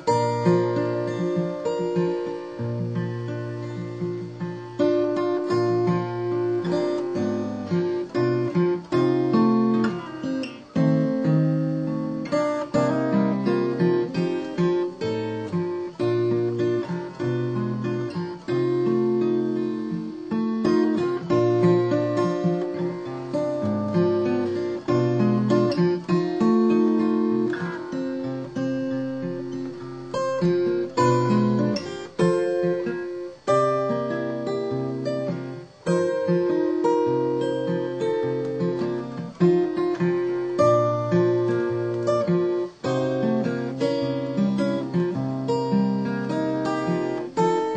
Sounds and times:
Acoustic guitar: 0.0 - 47.7
Strum: 0.0 - 47.7.

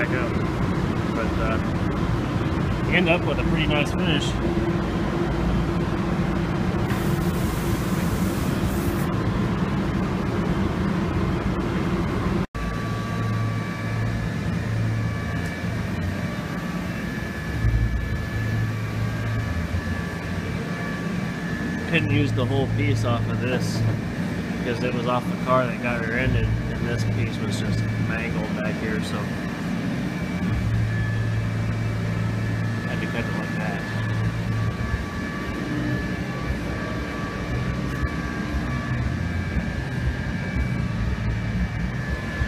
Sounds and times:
Speech: 0.0 - 0.4, 1.2 - 1.7, 2.9 - 4.4, 21.9 - 23.9, 24.6 - 29.4, 32.9 - 33.9
Vehicle: 0.0 - 42.4.

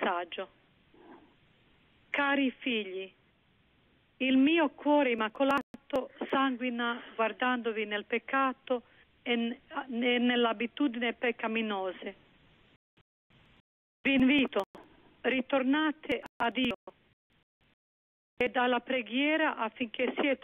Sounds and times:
Speech: 0.0 - 0.5, 2.2 - 3.2, 4.2 - 12.2, 14.1 - 17.0, 18.4 - 20.4
Radio: 5.3 - 7.2, 14.1 - 16.9, 19.8 - 20.4.

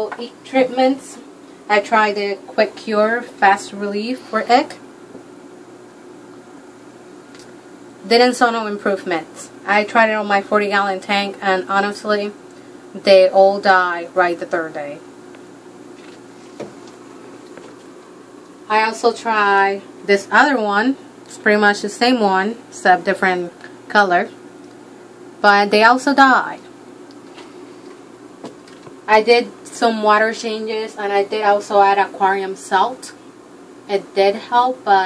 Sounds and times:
Speech: 0.0 - 4.8, 8.0 - 12.4, 13.0 - 15.0, 18.7 - 24.4, 25.4 - 26.7, 29.1 - 33.2, 33.9 - 35.0.

